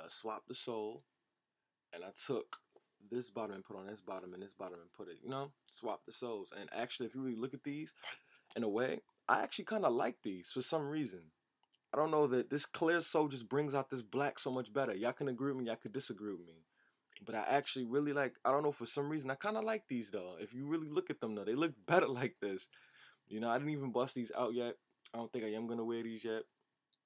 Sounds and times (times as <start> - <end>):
Speech: 0.0 - 1.0, 2.0 - 11.2, 12.0 - 16.6, 17.2 - 22.7, 23.3 - 26.4.